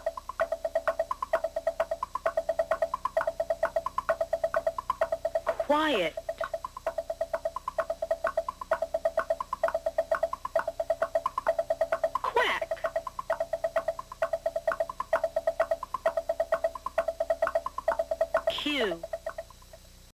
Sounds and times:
Music: 0.0s - 20.1s
Speech: 5.6s - 6.2s, 12.3s - 12.8s, 18.5s - 19.0s.

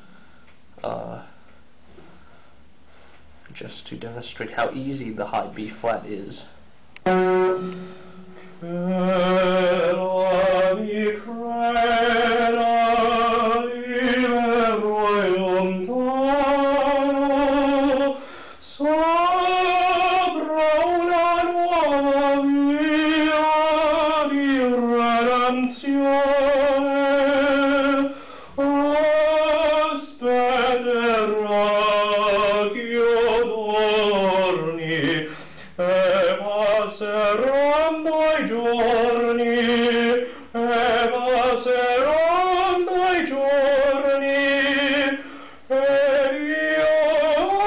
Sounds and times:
Music: 7.0s - 13.7s
Singing: 8.6s - 47.6s.

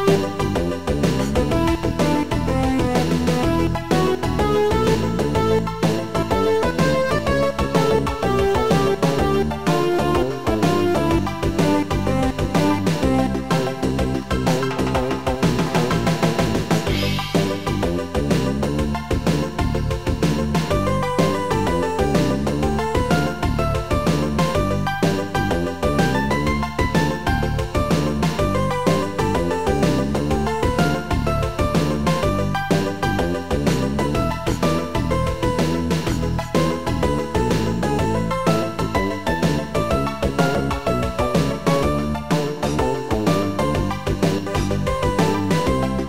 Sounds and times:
Exciting music: 0.0s - 46.0s.

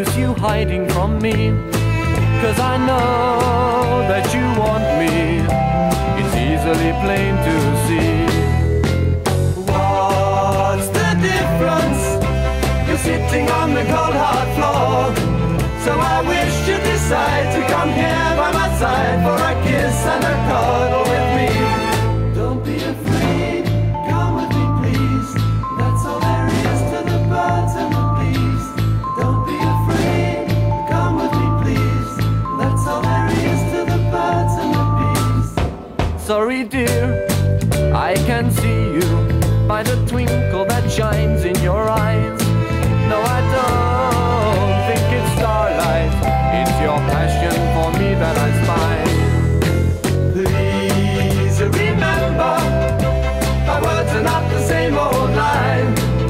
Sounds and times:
Music: 0.0s - 56.3s.

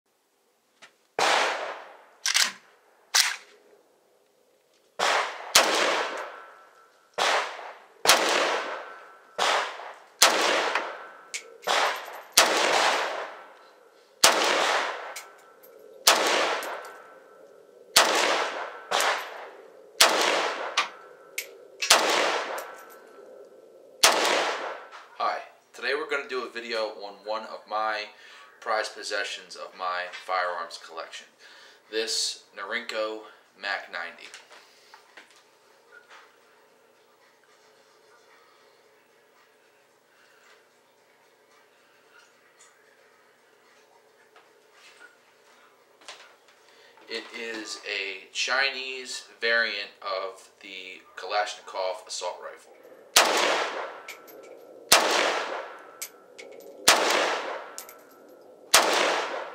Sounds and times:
Outside, rural or natural: 0.1s - 59.5s.

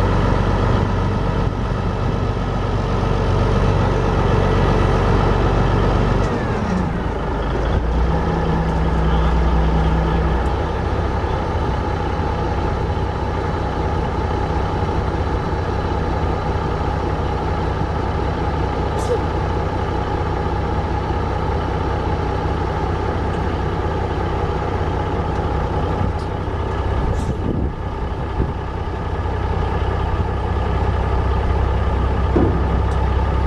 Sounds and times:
Vehicle: 0.0s - 33.4s.

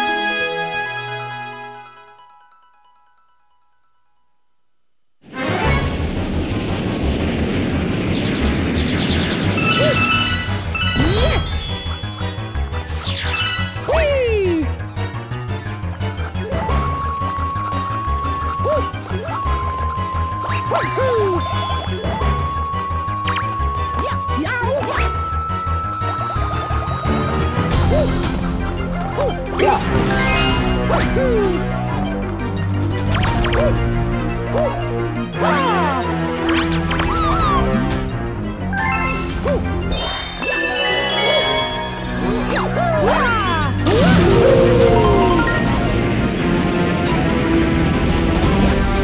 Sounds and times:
Music: 0.0s - 6.2s, 8.0s - 49.0s.

